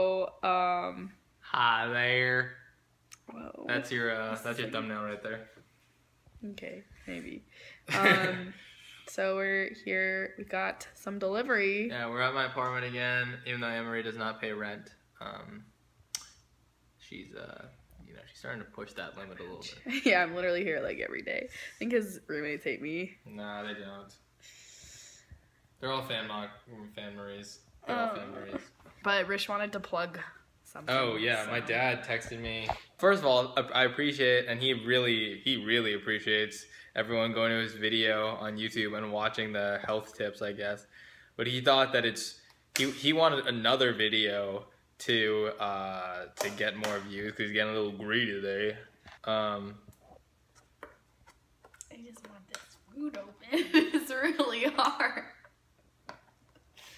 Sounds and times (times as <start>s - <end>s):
Inside, small room: 0.0s - 56.9s.